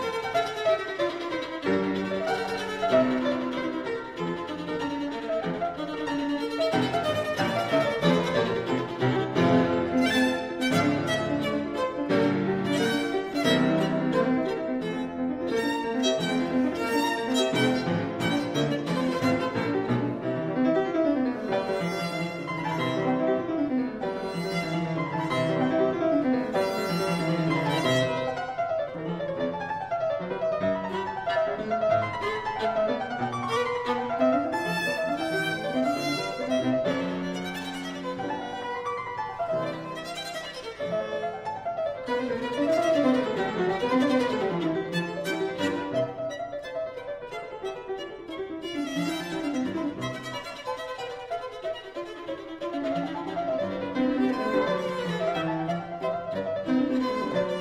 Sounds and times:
Violin, fiddle: 0:00.0 - 0:57.6.

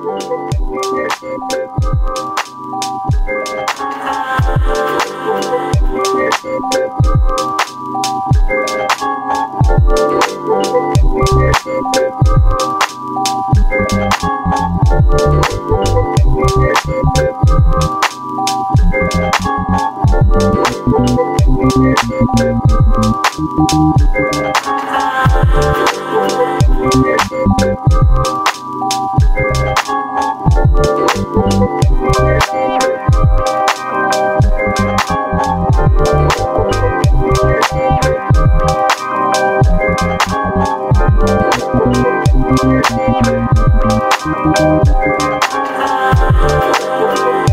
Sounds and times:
Music: 0:00.0 - 0:47.5.

